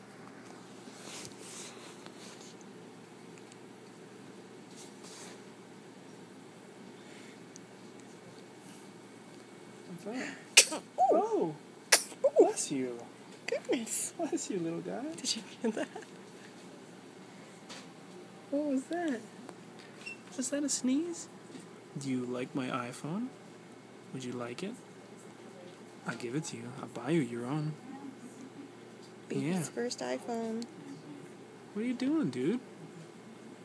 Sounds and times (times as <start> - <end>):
Sneeze: 10.5 - 11.1, 11.9 - 12.3.